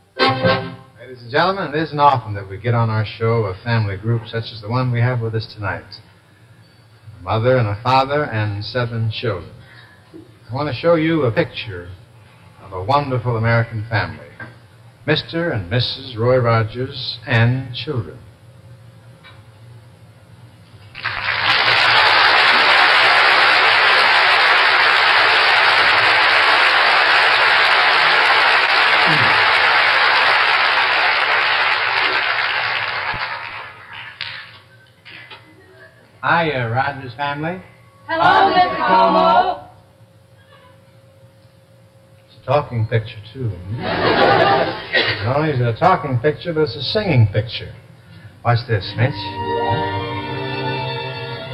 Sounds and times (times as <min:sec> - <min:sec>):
Speech: 0:01.0 - 0:06.0, 0:07.1 - 0:09.6, 0:10.5 - 0:12.0, 0:12.6 - 0:14.4, 0:15.1 - 0:18.2, 0:35.6 - 0:39.6, 0:42.3 - 0:43.9, 0:45.1 - 0:47.8, 0:48.5 - 0:49.3.